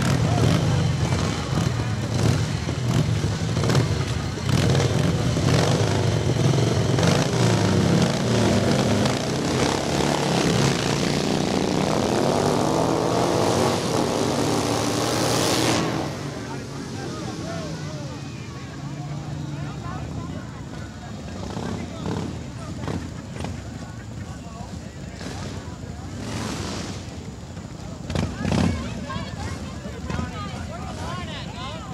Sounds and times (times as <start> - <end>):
Motorcycle: 0.0 - 31.9.